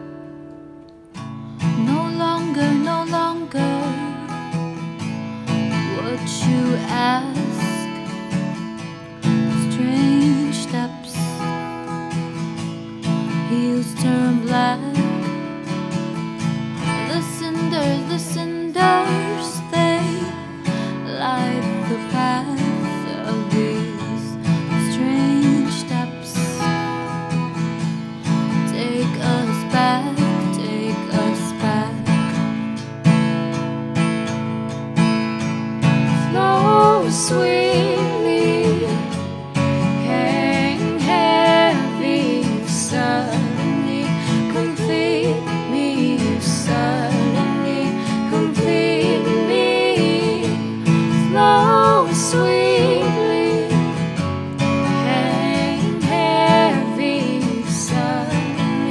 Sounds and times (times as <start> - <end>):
Music: 0.0 - 58.9
Female singing: 1.8 - 4.5, 5.8 - 8.1, 9.6 - 11.5, 13.4 - 15.3, 17.0 - 26.7, 28.7 - 32.1, 36.2 - 39.2, 40.0 - 54.0, 54.9 - 58.9.